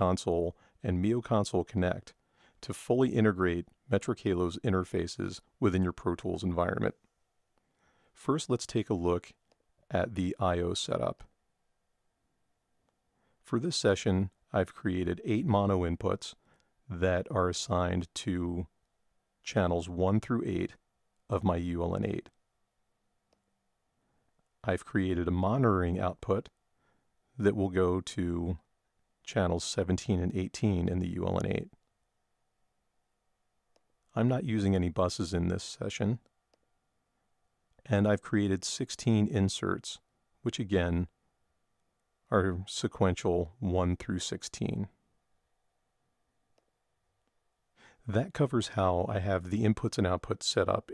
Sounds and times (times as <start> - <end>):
Speech: 0.0 - 7.0, 8.2 - 11.3, 13.4 - 18.7, 19.4 - 22.4, 24.6 - 26.6, 27.4 - 28.7, 29.3 - 31.8, 34.1 - 36.3, 37.8 - 41.2, 42.3 - 45.0, 48.0 - 50.9.